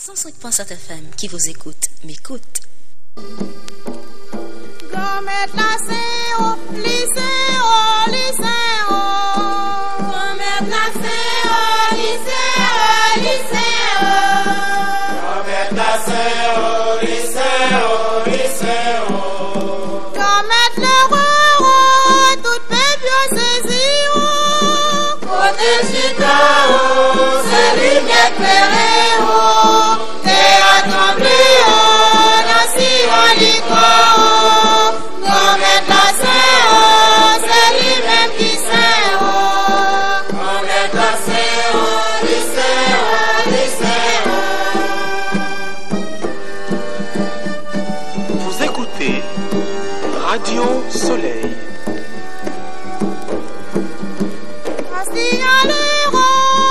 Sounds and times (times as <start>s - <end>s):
Music: 3.2s - 56.7s.